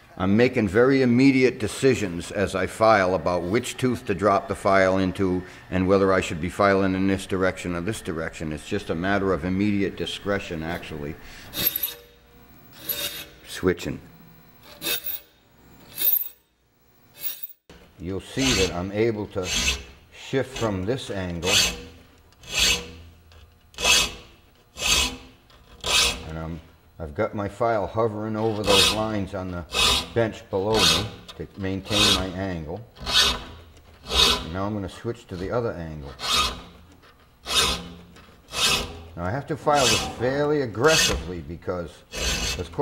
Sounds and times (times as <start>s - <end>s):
Filing (rasp): 11.5s - 12.1s, 12.8s - 13.4s, 14.6s - 15.3s, 18.3s - 20.8s, 21.4s - 23.0s, 23.8s - 26.3s, 28.4s - 32.4s, 33.0s - 34.6s, 35.3s - 41.3s, 42.1s - 42.8s.